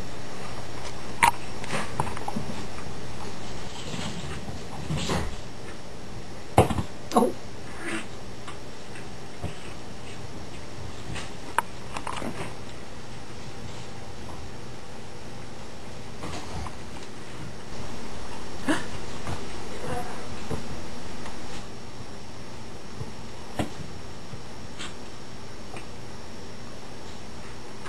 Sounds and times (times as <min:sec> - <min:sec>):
Animal: 0:07.7 - 0:08.2.